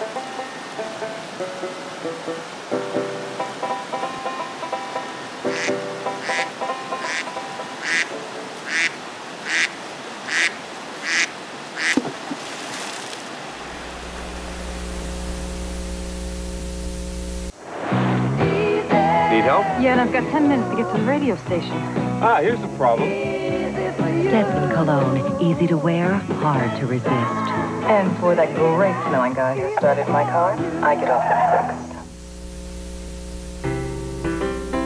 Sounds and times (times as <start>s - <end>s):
Stream: 0.0s - 14.2s.